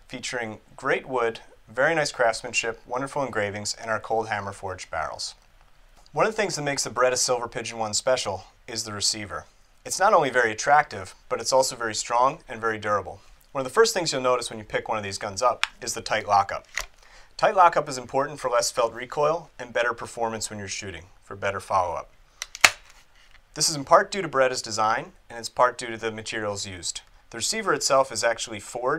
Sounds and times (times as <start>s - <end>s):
Speech: 0.1s - 5.4s, 6.1s - 16.7s, 17.4s - 22.1s, 23.6s - 28.9s.